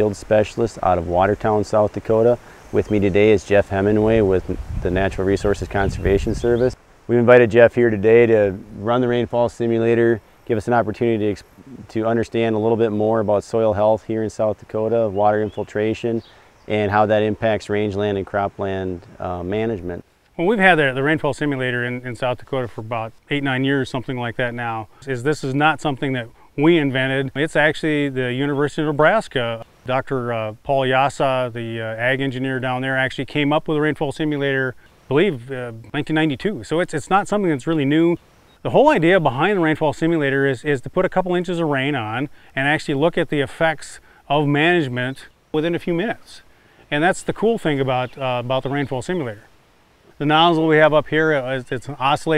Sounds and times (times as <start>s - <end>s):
Speech: 0.0s - 49.5s, 50.1s - 52.3s.